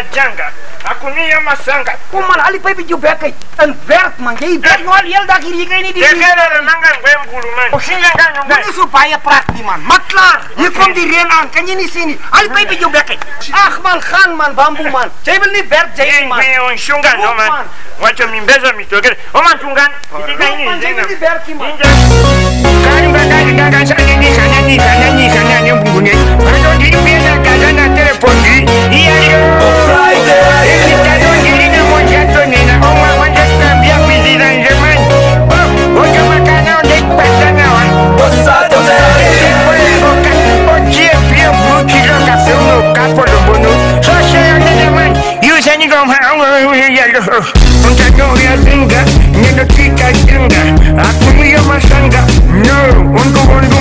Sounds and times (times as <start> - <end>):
Afrobeat: 21.8 - 45.7, 47.6 - 53.8
Song: 21.8 - 45.8, 47.6 - 53.8.